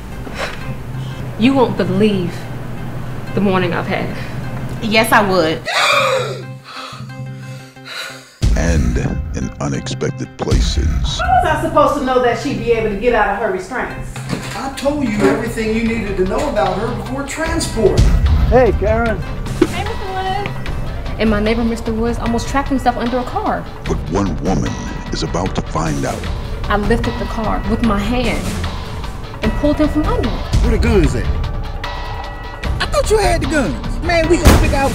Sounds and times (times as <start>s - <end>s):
Music: 0.0s - 34.9s
Speech: 8.5s - 11.4s, 23.9s - 26.2s.